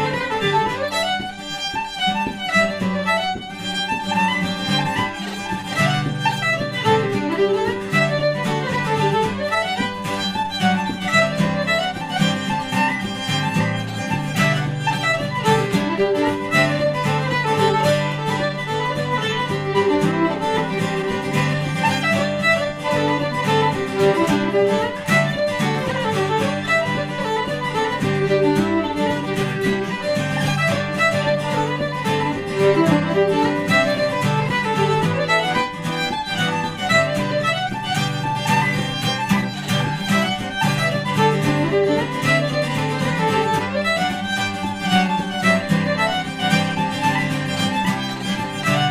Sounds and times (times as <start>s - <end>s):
Acoustic guitar: 0.0s - 48.9s
Strum: 0.0s - 48.9s
Violin, fiddle: 0.0s - 48.9s.